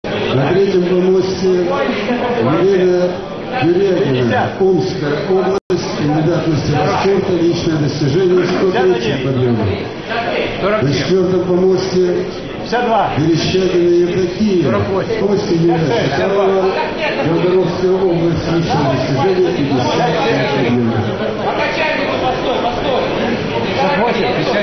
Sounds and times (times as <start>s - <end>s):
Male speech, man speaking: 0.1s - 24.6s.